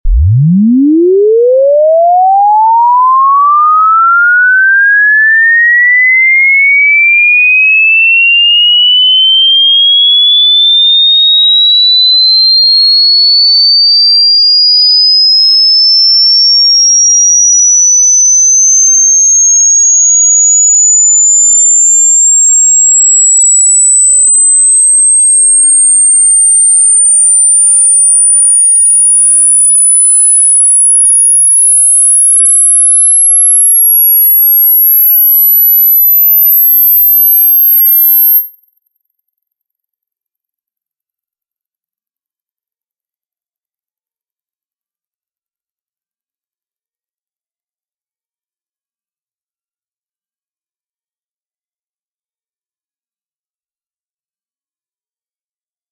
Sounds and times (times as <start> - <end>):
Sine wave: 0.1 - 41.8.